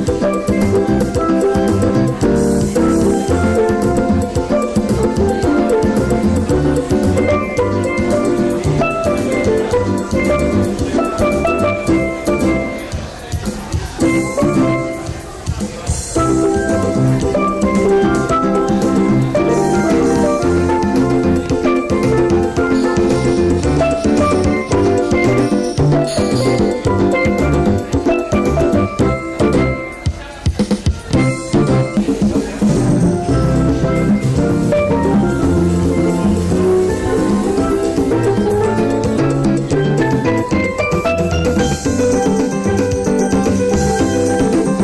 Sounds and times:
Steelpan: 0:00.0 - 0:44.8
Speech: 0:00.4 - 0:34.2.

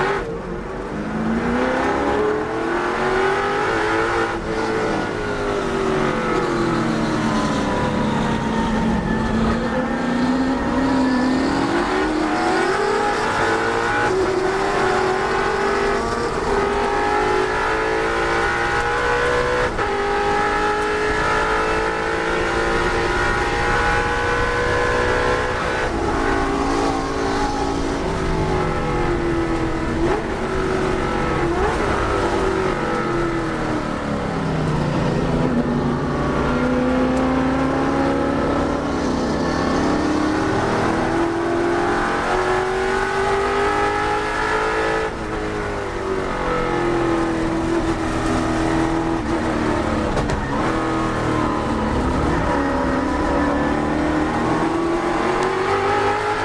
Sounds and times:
Car: 0:00.0 - 0:56.4.

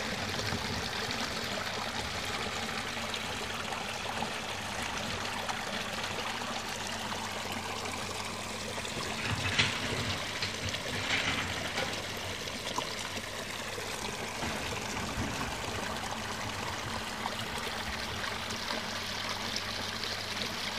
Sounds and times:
Trickle, dribble: 0:00.0 - 0:20.7
Water: 0:00.0 - 0:20.7.

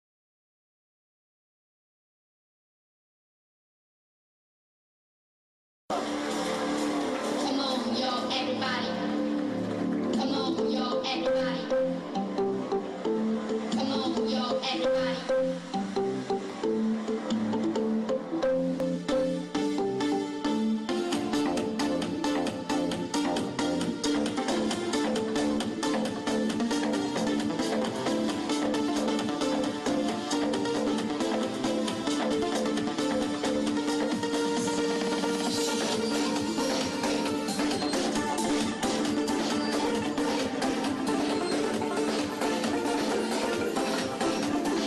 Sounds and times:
Music: 0:05.9 - 0:44.8.

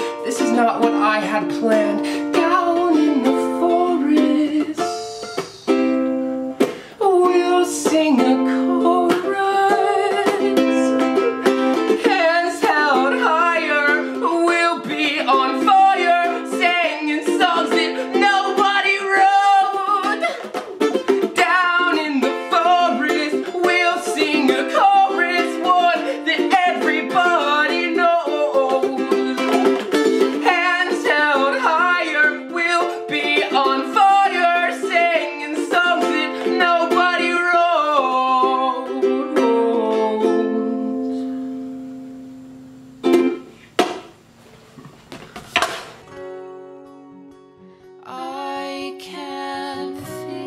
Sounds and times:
Guitar: 0:00.0 - 0:50.4
Ukulele: 0:00.0 - 0:50.4.

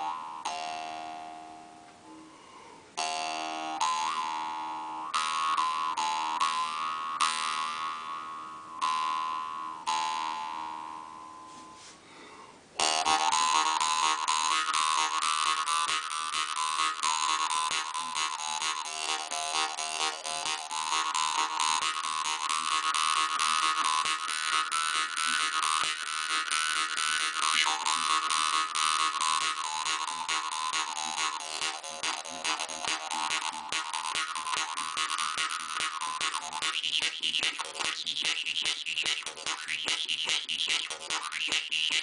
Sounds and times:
Music: 0:00.0 - 0:02.4, 0:03.0 - 0:11.8, 0:12.8 - 0:42.0.

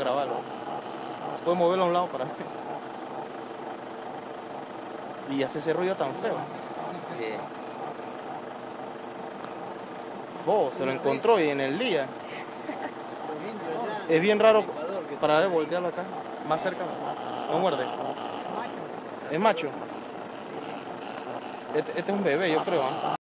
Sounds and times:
Speech: 0:21.8 - 0:23.2.

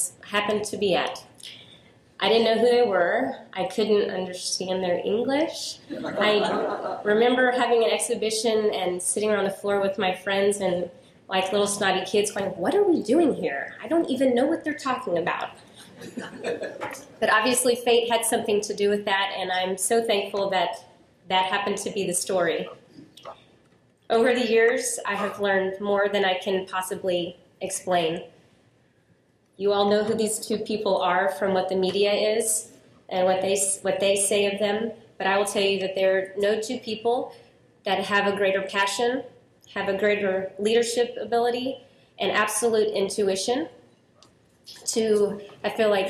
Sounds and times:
Female speech, woman speaking: 0:00.0 - 0:01.4, 0:02.2 - 0:15.6, 0:16.9 - 0:22.7, 0:24.1 - 0:28.2, 0:29.6 - 0:37.3, 0:37.9 - 0:43.7, 0:44.8 - 0:46.0
Narration, monologue: 0:00.0 - 0:46.0.

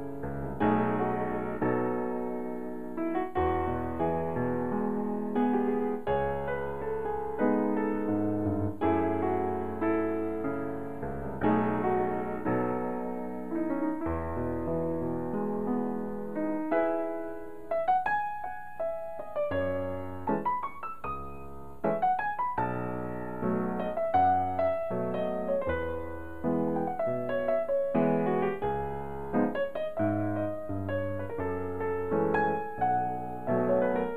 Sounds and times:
Electric piano: 0:00.0 - 0:34.1.

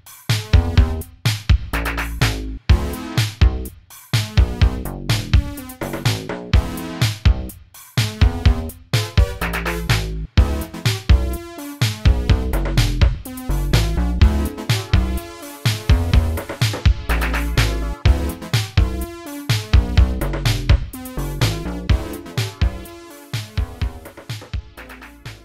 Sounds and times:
Music: 0:00.0 - 0:25.4.

